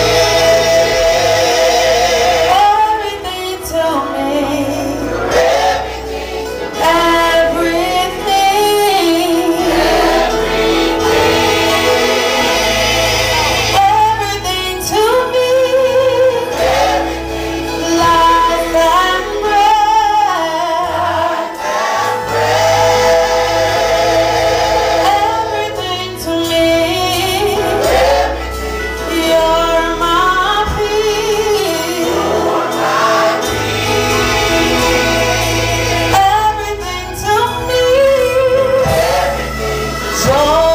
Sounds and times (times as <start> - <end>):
Choir: 0.0 - 40.7
Gospel music: 0.0 - 40.7
Female singing: 2.6 - 5.0, 6.8 - 10.1, 13.8 - 16.5, 17.8 - 21.3, 25.1 - 27.8, 29.1 - 32.1, 36.2 - 39.0.